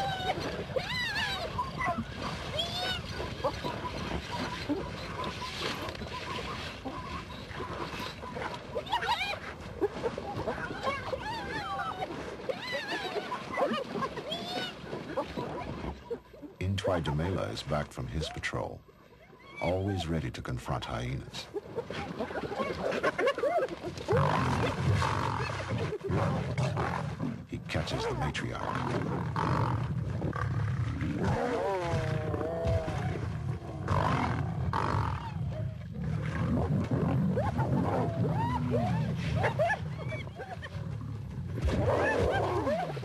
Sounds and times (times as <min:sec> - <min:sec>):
Roaring cats (lions, tigers): 0:24.1 - 0:27.4, 0:28.0 - 0:43.0.